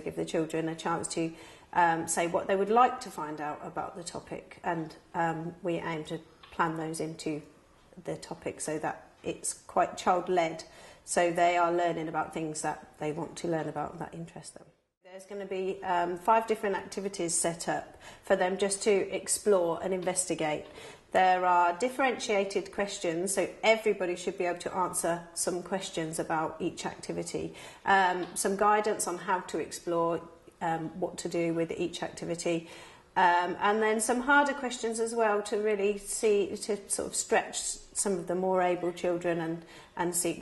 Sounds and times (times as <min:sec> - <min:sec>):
Speech: 0:00.0 - 0:40.4.